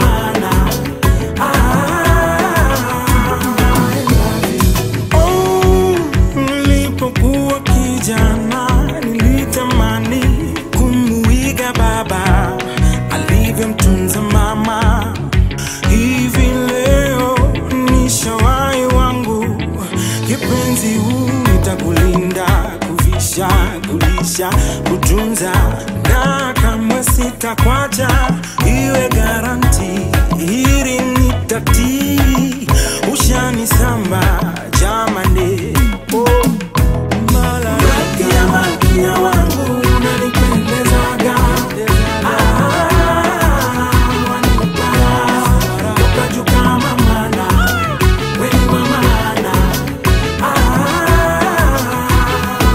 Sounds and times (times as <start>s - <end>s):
Afrobeat: 0.0s - 52.7s.